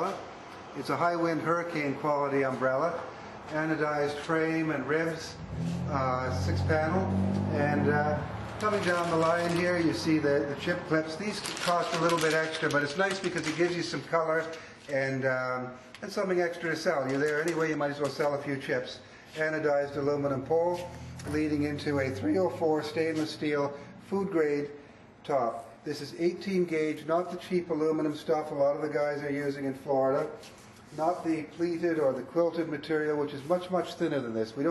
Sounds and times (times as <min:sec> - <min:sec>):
Speech: 0:00.0 - 0:00.2, 0:00.8 - 0:30.4, 0:31.0 - 0:34.7.